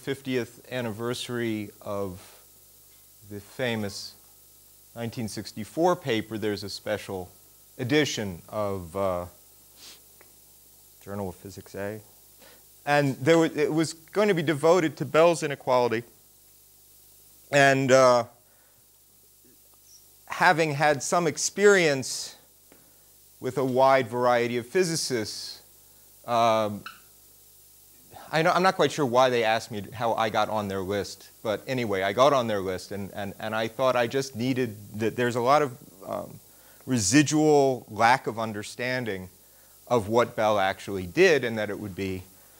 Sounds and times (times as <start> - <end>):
Speech: 0.0 - 2.4, 3.2 - 4.2, 5.0 - 9.4, 11.0 - 12.1, 12.8 - 16.1, 17.5 - 18.4, 20.3 - 22.5, 23.4 - 25.7, 26.3 - 26.8, 28.2 - 42.3.